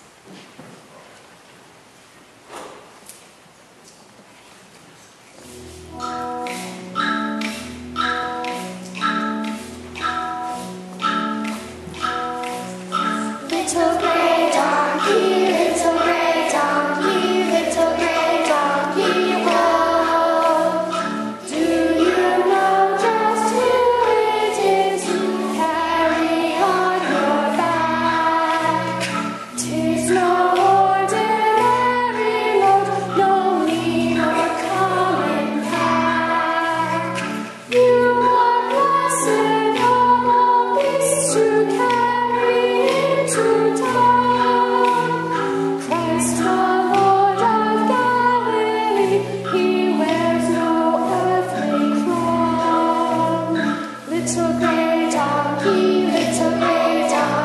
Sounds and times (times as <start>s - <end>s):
Child singing: 13.4s - 45.3s, 45.9s - 57.4s
Choir: 13.4s - 57.4s.